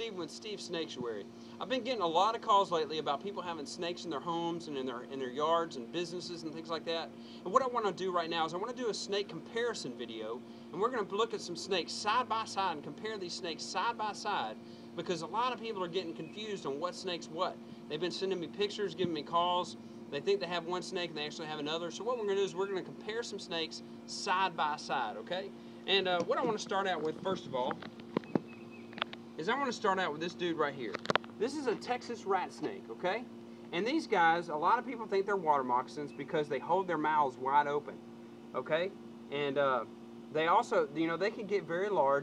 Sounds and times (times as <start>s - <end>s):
Speech: 0.0s - 27.8s, 29.4s - 38.0s, 38.6s - 42.2s.